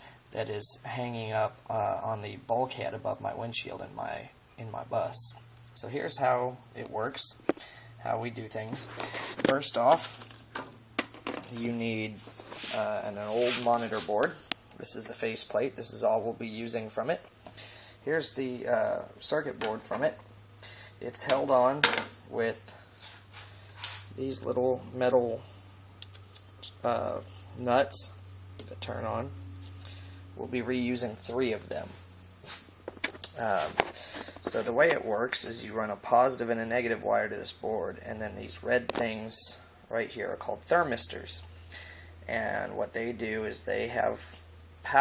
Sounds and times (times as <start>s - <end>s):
Speech: 0.3s - 7.4s, 8.0s - 10.2s, 11.5s - 17.3s, 18.1s - 20.2s, 21.0s - 22.8s, 24.2s - 25.5s, 26.6s - 29.3s, 30.4s - 32.0s, 33.4s - 33.8s, 34.5s - 41.5s, 42.3s - 45.0s.